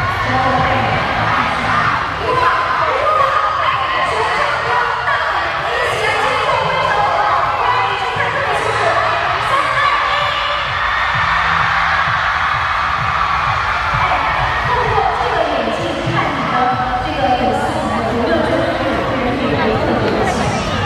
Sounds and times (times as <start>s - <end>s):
Speech: 0.0s - 10.6s, 14.0s - 20.8s
Music: 0.0s - 20.8s.